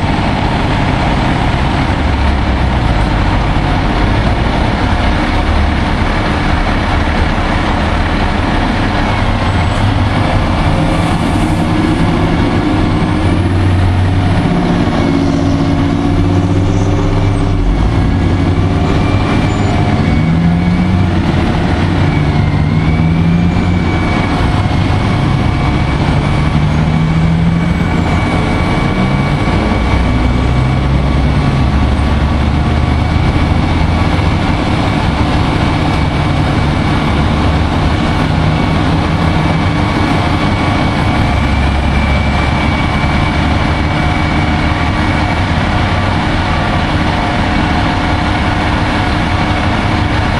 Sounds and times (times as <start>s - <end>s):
Truck: 0.0s - 50.3s.